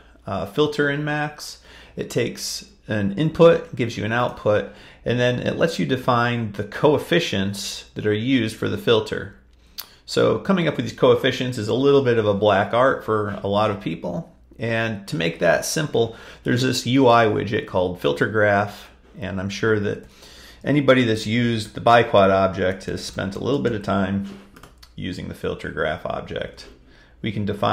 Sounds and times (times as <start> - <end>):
Speech: 0.0 - 27.7.